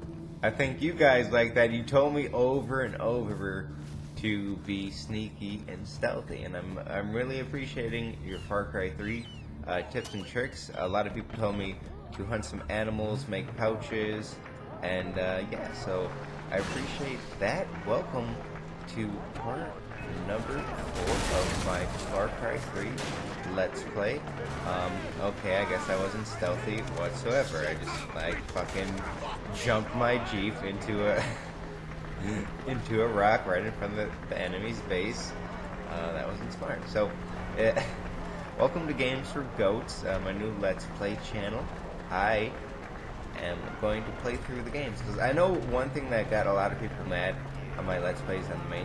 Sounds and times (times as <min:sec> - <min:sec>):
Speech: 0:00.4 - 0:31.5, 0:32.2 - 0:42.6, 0:43.4 - 0:48.8.